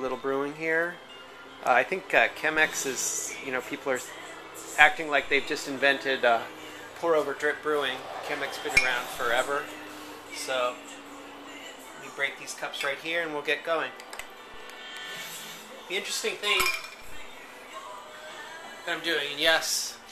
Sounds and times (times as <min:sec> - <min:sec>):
Speech: 0:00.0 - 0:01.0, 0:01.6 - 0:04.1, 0:04.8 - 0:09.7, 0:10.3 - 0:10.8, 0:12.0 - 0:13.9, 0:15.9 - 0:16.7, 0:18.9 - 0:20.0
Music: 0:00.0 - 0:20.1.